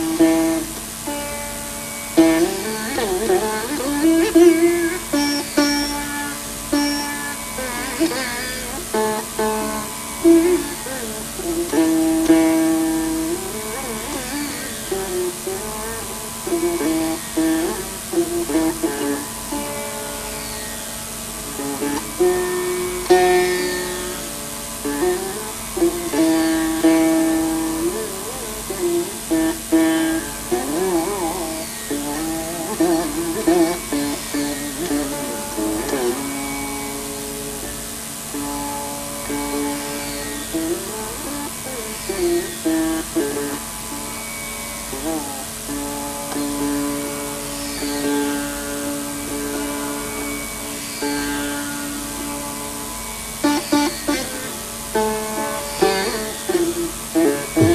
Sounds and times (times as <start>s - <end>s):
Carnatic music: 0.0s - 57.7s
Sitar: 0.0s - 57.7s.